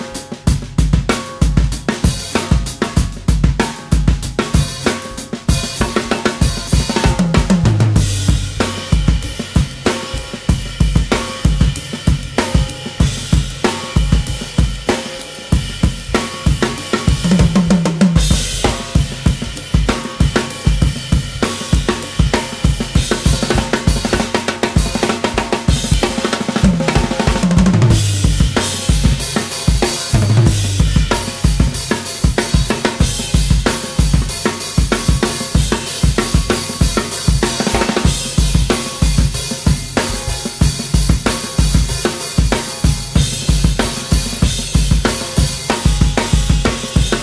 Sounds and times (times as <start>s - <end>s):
Bass drum: 0.0s - 47.2s
Drum kit: 0.0s - 47.2s
Drum roll: 0.0s - 47.2s
Rimshot: 1.1s - 47.2s.